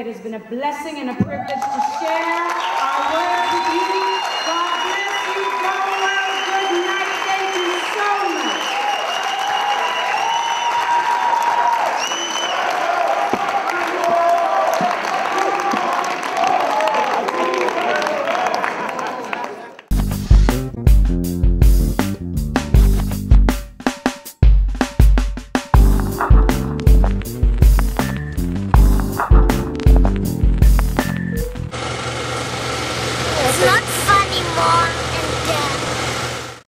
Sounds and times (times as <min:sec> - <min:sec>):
Music: 0:19.9 - 0:31.7
Speech: 0:33.4 - 0:35.8.